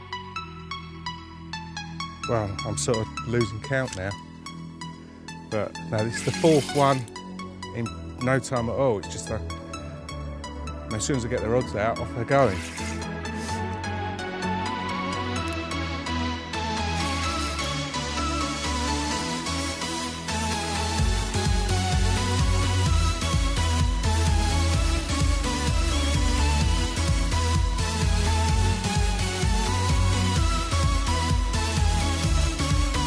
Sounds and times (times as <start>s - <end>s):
Music: 0.0s - 33.0s
Speech: 2.2s - 4.2s, 5.5s - 7.1s, 7.7s - 9.4s, 10.9s - 12.7s.